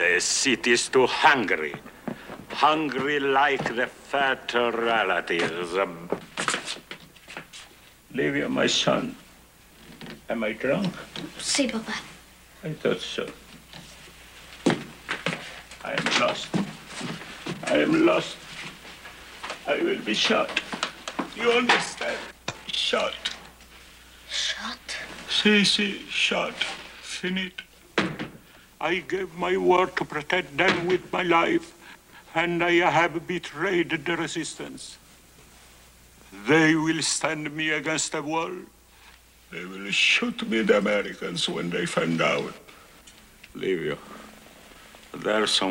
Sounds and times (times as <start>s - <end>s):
Speech: 2.5s - 6.2s, 8.1s - 9.2s, 15.8s - 16.6s, 17.6s - 18.4s, 19.7s - 20.6s, 21.3s - 23.4s, 24.3s - 27.7s, 28.8s - 35.0s, 36.3s - 38.7s, 39.5s - 42.6s, 45.1s - 45.7s.